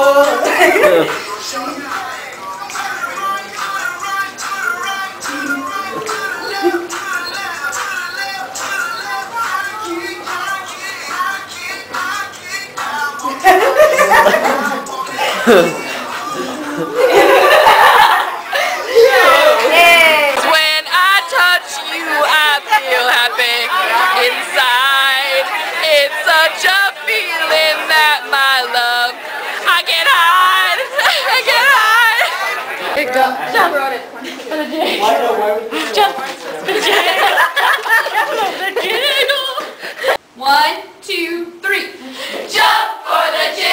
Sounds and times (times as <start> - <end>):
Music: 0.0 - 17.5
Inside, large room or hall: 0.0 - 40.1.